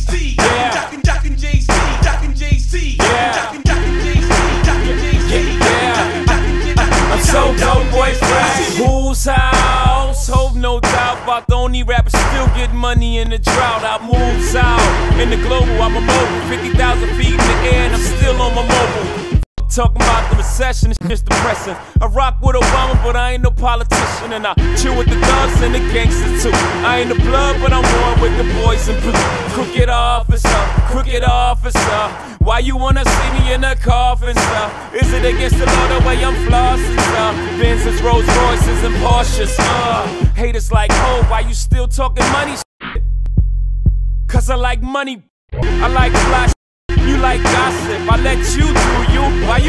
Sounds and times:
Music: 0.0 - 44.2, 45.6 - 49.6.

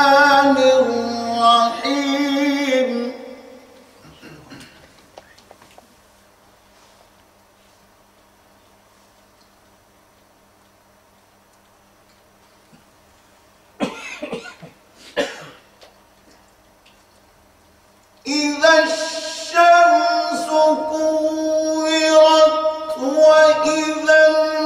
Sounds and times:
Cough: 4.0 - 4.9, 13.8 - 15.7.

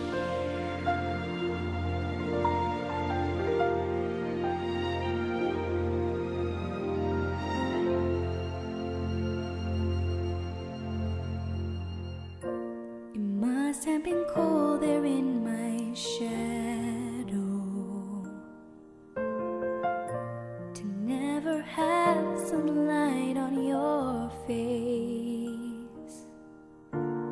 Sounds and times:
Music: 0.0 - 27.3.

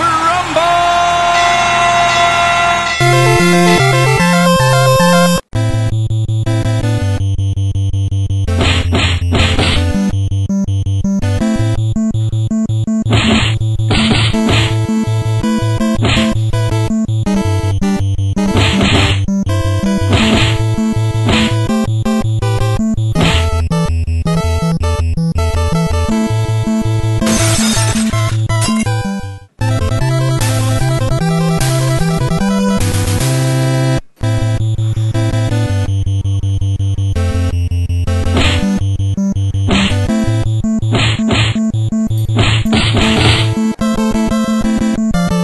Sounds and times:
Music: 3.0 - 45.4.

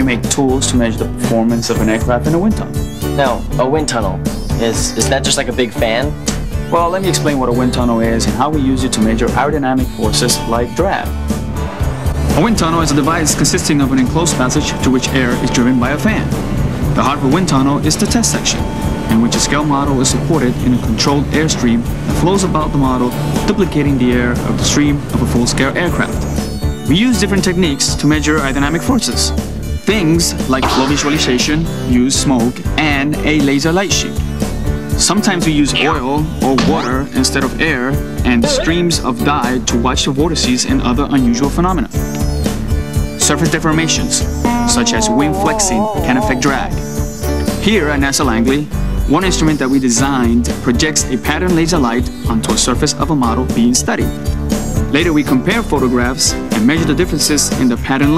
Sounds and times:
Speech: 0.0 - 11.1, 12.4 - 16.3, 17.0 - 26.2, 26.9 - 34.2, 35.0 - 42.0, 43.2 - 46.8, 47.6 - 54.1, 54.9 - 58.1
Music: 0.0 - 58.1.

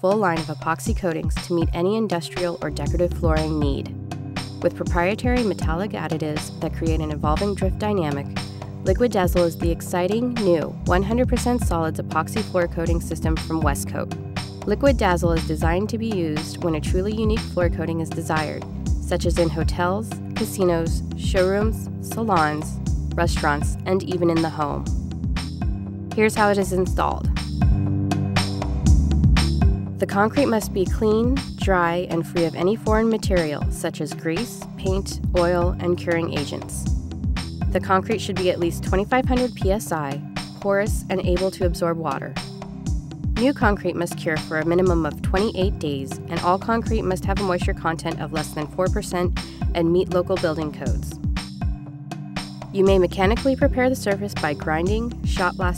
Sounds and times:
Speech: 0.0 - 3.9, 4.6 - 8.3, 8.9 - 14.1, 14.7 - 24.9, 26.2 - 27.3, 30.0 - 36.8, 37.7 - 42.4, 43.4 - 51.1, 52.8 - 55.7
Music: 0.0 - 55.7.

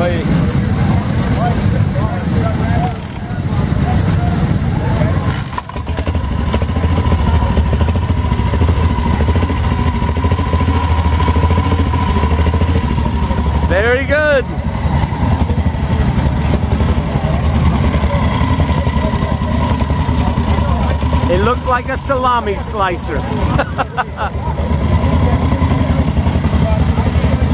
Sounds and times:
Speech: 0.0 - 5.3, 13.3 - 27.5
Motorcycle: 0.0 - 27.5
Outside, urban or manmade: 0.0 - 27.5.

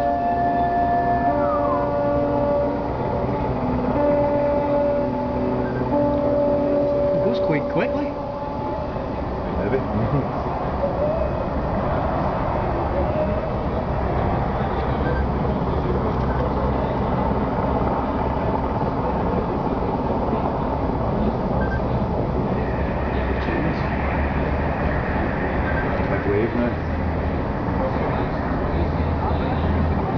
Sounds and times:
Speech: 7.2 - 8.2, 26.1 - 26.8.

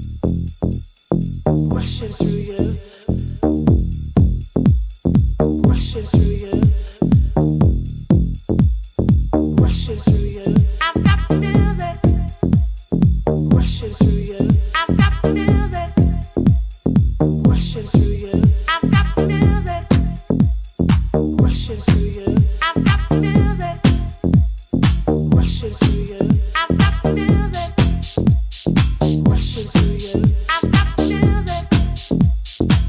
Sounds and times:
Music: 0.0 - 32.8.

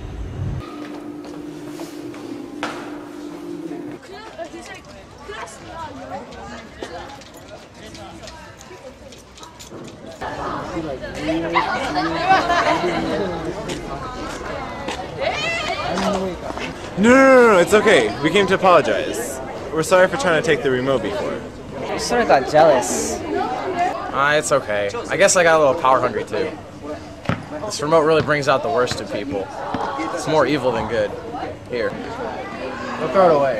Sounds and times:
Outside, urban or manmade: 0.0 - 2.9, 3.6 - 33.5.

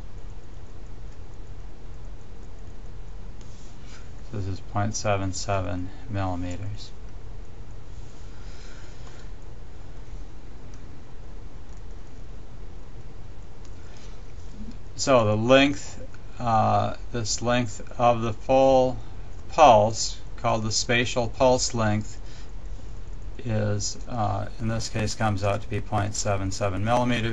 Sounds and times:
Speech: 4.3 - 7.0, 15.0 - 22.2, 23.4 - 27.3.

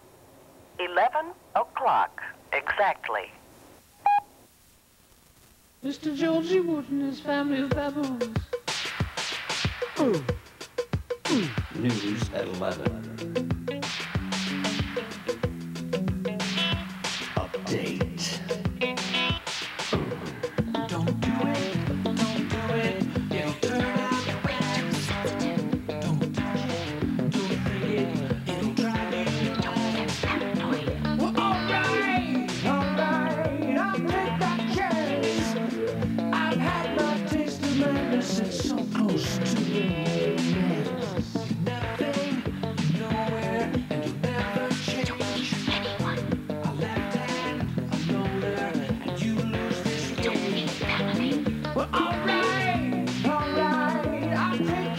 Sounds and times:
Music: 5.8 - 54.9.

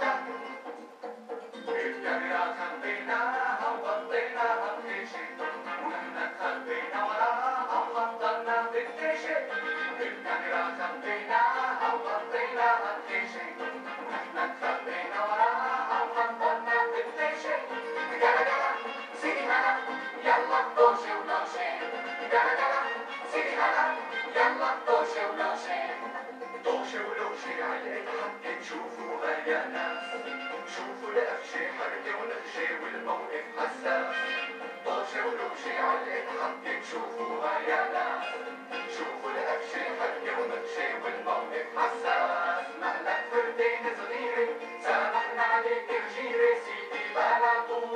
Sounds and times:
Music: 0.0 - 47.9.

